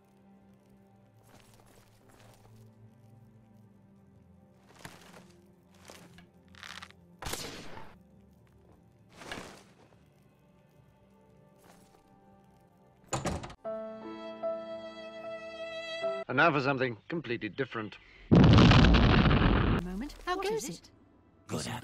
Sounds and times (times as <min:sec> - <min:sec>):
Music: 0:00.0 - 0:18.2, 0:19.8 - 0:21.8
Speech: 0:16.3 - 0:18.0, 0:19.8 - 0:20.9, 0:21.5 - 0:21.8.